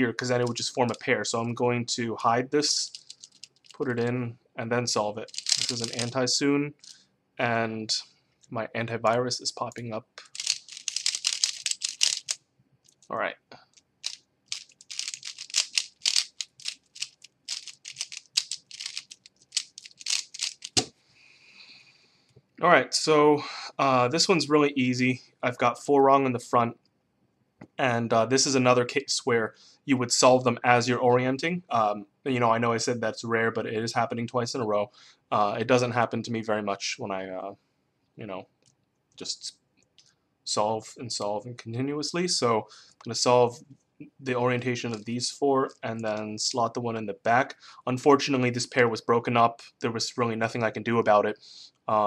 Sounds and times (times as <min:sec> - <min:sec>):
Speech: 0:00.0 - 0:02.9, 0:03.8 - 0:06.8, 0:07.4 - 0:10.3, 0:13.1 - 0:13.6, 0:22.6 - 0:26.8, 0:27.8 - 0:37.6, 0:38.2 - 0:38.4, 0:39.2 - 0:39.5, 0:40.5 - 0:52.0.